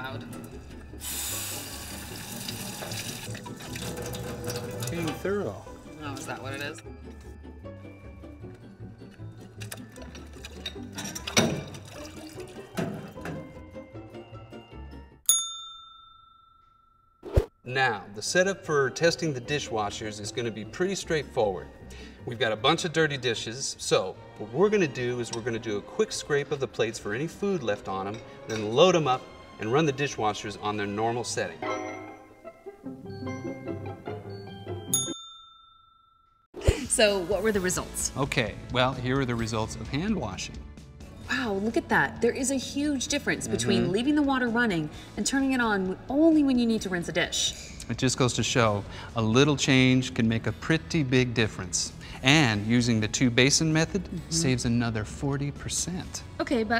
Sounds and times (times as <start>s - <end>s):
Music: 0.0s - 15.6s, 17.6s - 35.2s, 36.6s - 56.7s.